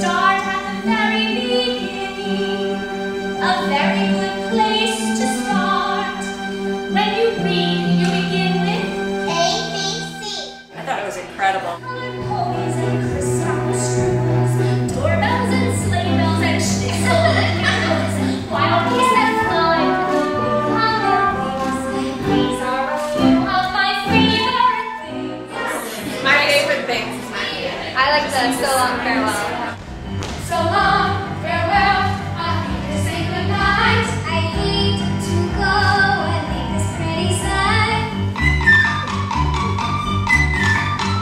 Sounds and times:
Music: 0.0s - 41.2s.

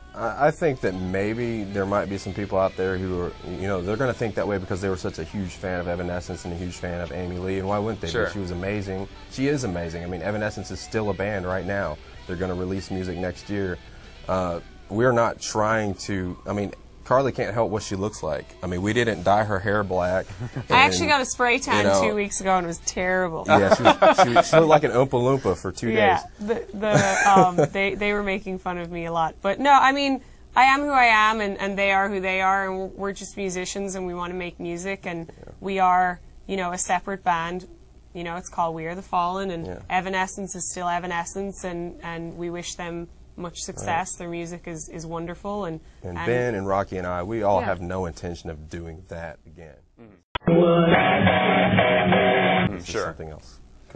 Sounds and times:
Music: 0.0s - 25.9s, 50.4s - 53.0s
Speech: 0.2s - 49.8s, 52.7s - 53.9s.

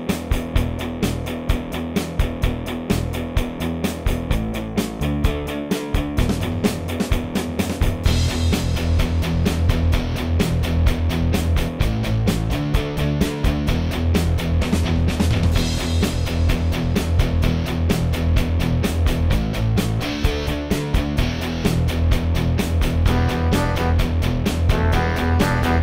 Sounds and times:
Music: 0.0s - 25.8s.

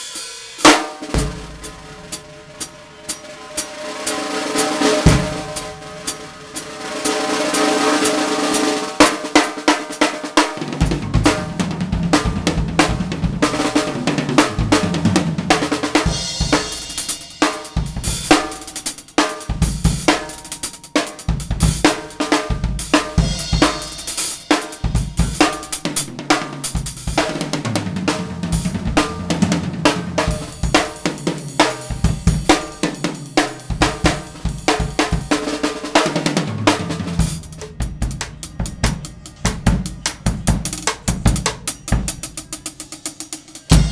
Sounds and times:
Drum: 0.0s - 43.9s
Drum kit: 0.0s - 43.9s.

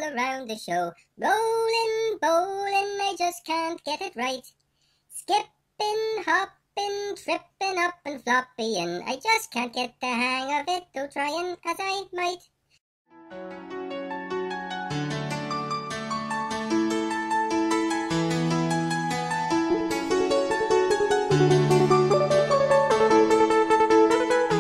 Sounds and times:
Music: 13.1s - 24.6s.

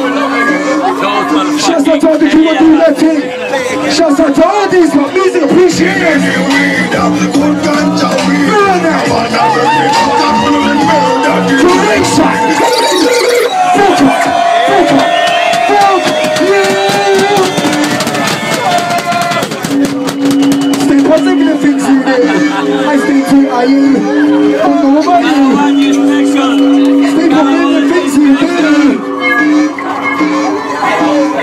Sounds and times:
Dubstep: 5.5s - 31.4s.

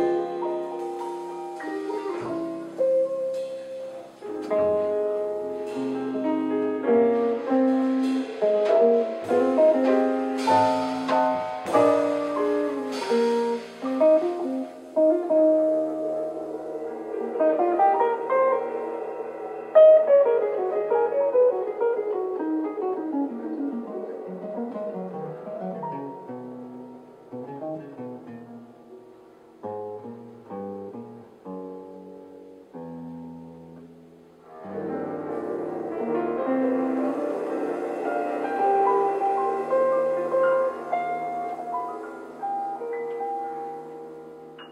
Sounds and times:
Drum: 0.0s - 20.8s
Drum kit: 0.0s - 32.6s, 33.2s - 44.7s
Double bass: 0.0s - 44.7s
Guitar: 0.0s - 44.7s.

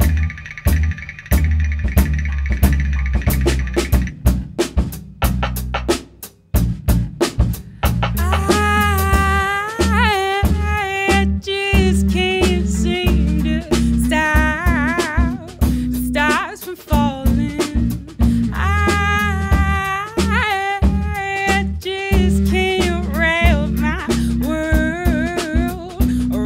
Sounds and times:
Music: 0.0s - 26.4s.

